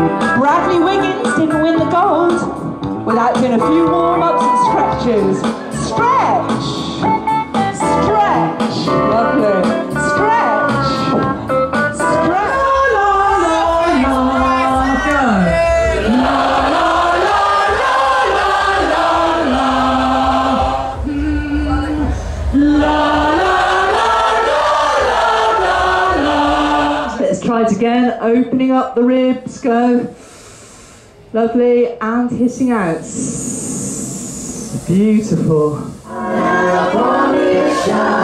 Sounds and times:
Choir: 0:12.2 - 0:27.4, 0:36.0 - 0:38.2.

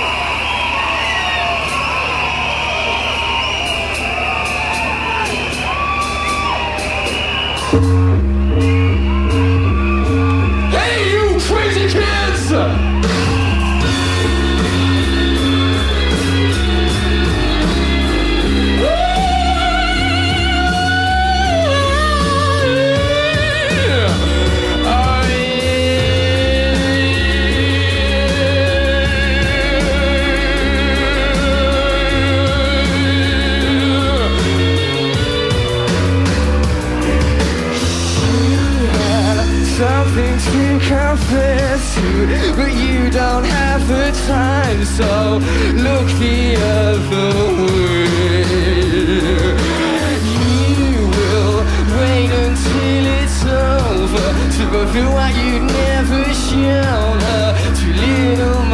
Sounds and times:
Music: 0:00.0 - 0:58.7.

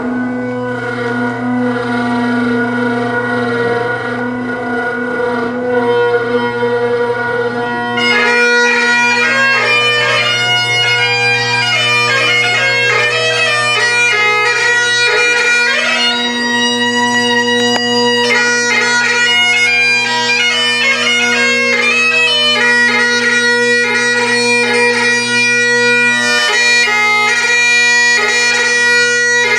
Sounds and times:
Bagpipes: 0:00.0 - 0:29.5.

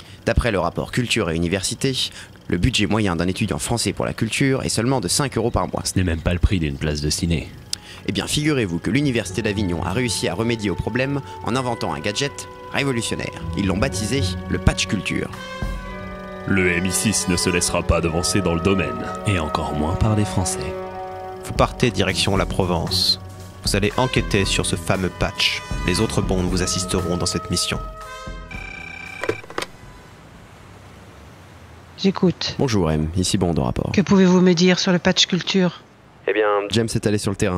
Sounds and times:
Speech: 0:00.2 - 0:15.4, 0:16.5 - 0:20.8, 0:21.5 - 0:27.9, 0:32.0 - 0:37.5
Music: 0:06.8 - 0:30.0.

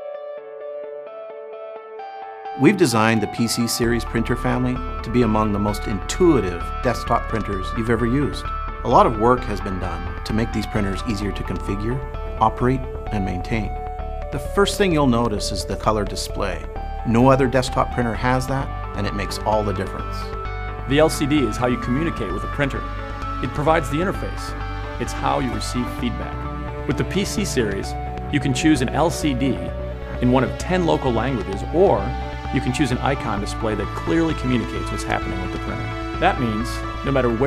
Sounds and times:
Music: 0:00.0 - 0:37.4
Speech: 0:02.6 - 0:20.3, 0:20.9 - 0:37.4.

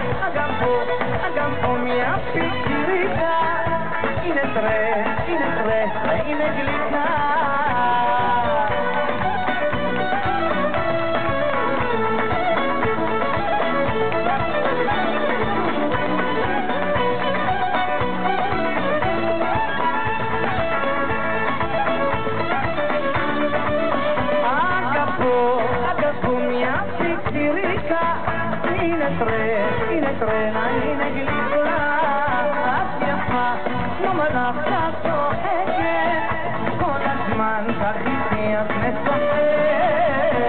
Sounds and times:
Singing: 0:00.0 - 0:12.0, 0:23.7 - 0:40.4
Music: 0:00.0 - 0:40.4.

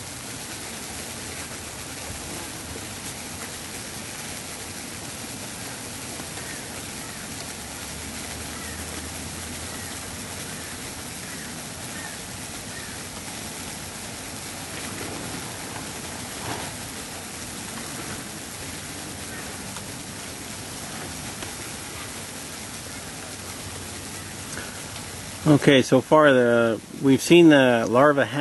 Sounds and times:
Insect: 0:00.0 - 0:28.4.

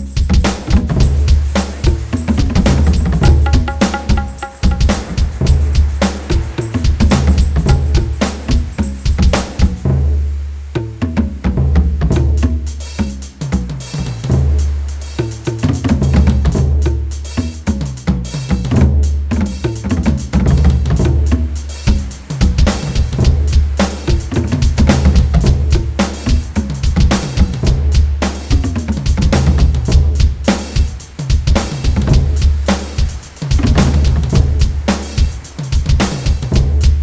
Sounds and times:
Music: 0:00.0 - 0:37.0
Outside, rural or natural: 0:00.0 - 0:37.0.

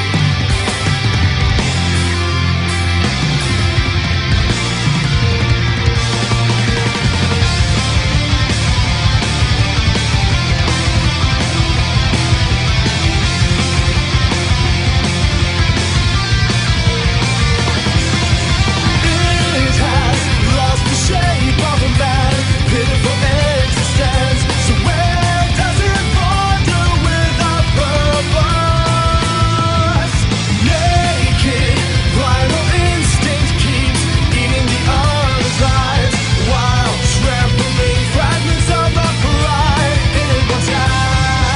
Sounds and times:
Music: 0:00.0 - 0:41.5.

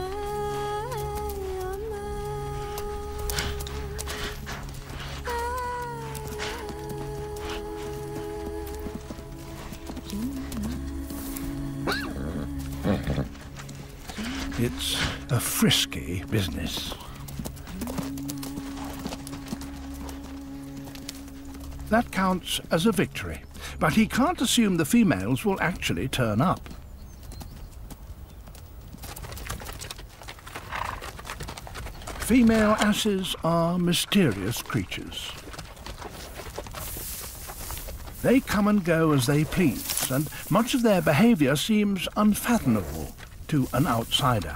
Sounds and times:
Music: 0:00.0 - 0:26.5
Horse: 0:00.0 - 0:44.5
Outside, rural or natural: 0:00.0 - 0:44.5
Speech: 0:14.2 - 0:17.1, 0:21.9 - 0:26.6, 0:32.2 - 0:35.4, 0:38.2 - 0:44.5.

